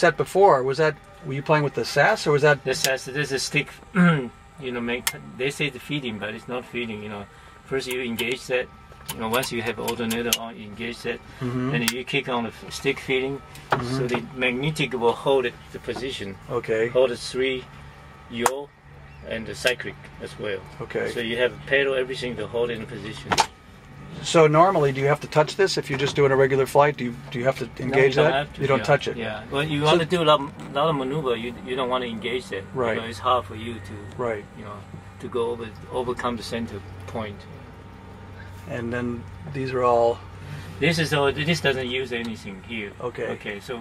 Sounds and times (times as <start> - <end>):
Speech: 0.0 - 17.6, 18.3 - 23.4, 24.2 - 37.4, 38.7 - 40.2, 40.8 - 43.8.